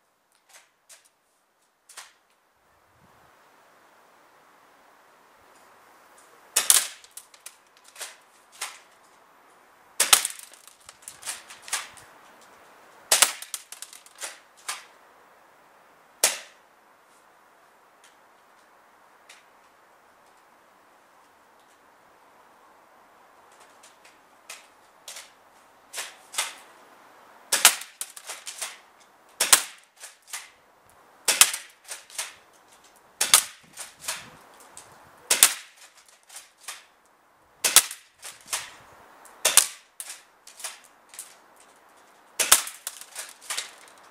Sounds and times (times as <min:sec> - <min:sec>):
Cap gun: 0:06.6 - 0:07.0, 0:10.0 - 0:10.6, 0:13.1 - 0:14.8, 0:16.2 - 0:16.5, 0:27.5 - 0:28.8, 0:29.4 - 0:30.5, 0:31.3 - 0:32.4, 0:33.2 - 0:34.2, 0:35.3 - 0:35.8, 0:37.6 - 0:38.7, 0:39.4 - 0:40.8, 0:42.4 - 0:43.8.